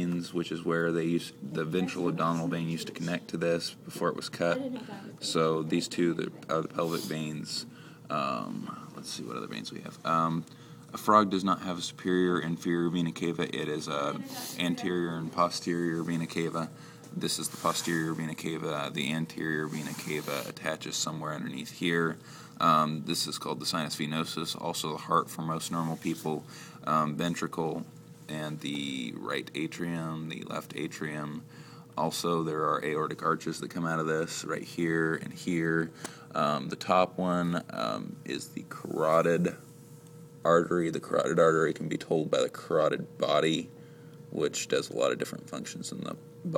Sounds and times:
Speech: 0:00.0 - 0:31.4, 0:32.0 - 0:39.6, 0:40.4 - 0:43.7, 0:44.3 - 0:46.5.

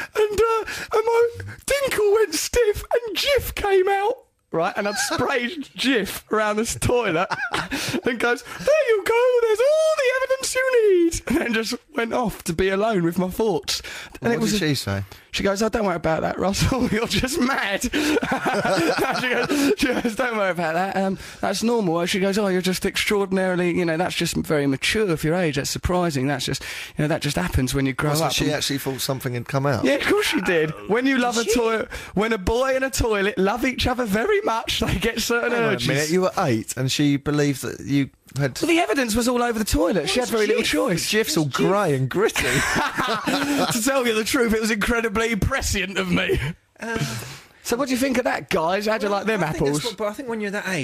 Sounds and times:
Speech: 0:00.0 - 0:50.8.

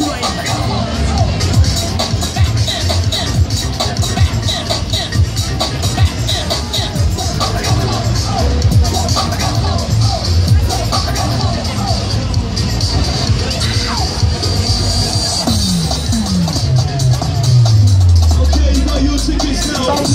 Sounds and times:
Music: 0:00.0 - 0:20.1.

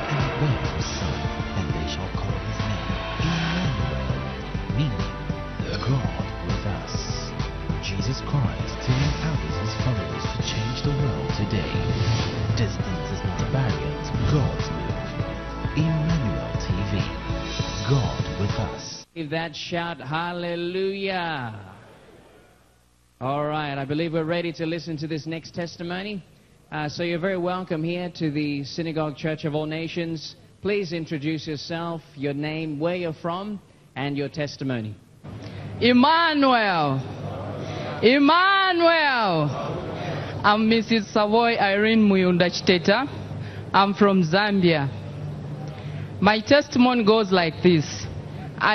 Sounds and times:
Speech: 0:17.9 - 0:21.8, 0:23.2 - 0:35.0.

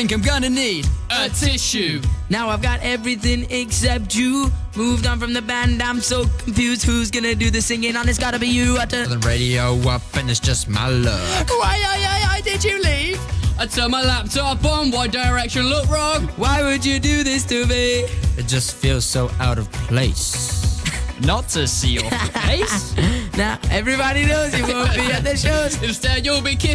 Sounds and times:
Music: 0:00.0 - 0:26.7.

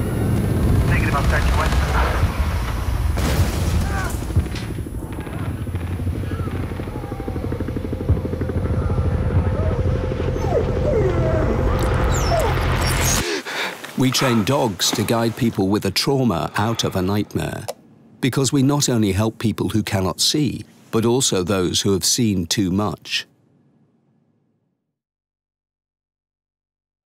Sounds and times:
Speech: 0:00.9 - 0:02.3, 0:14.0 - 0:23.3.

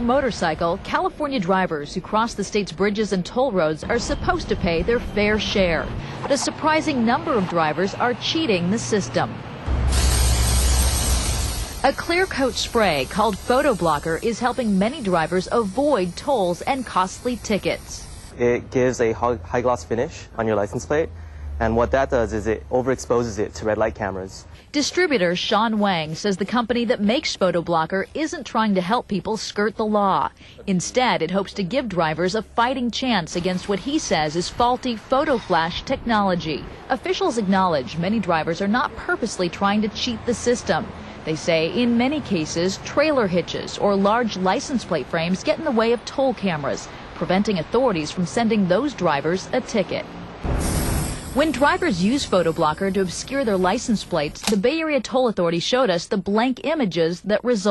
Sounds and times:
Spray: 0:09.7 - 0:18.4, 0:50.5 - 0:54.4
Speech: 0:18.4 - 0:50.0, 0:51.4 - 0:57.7.

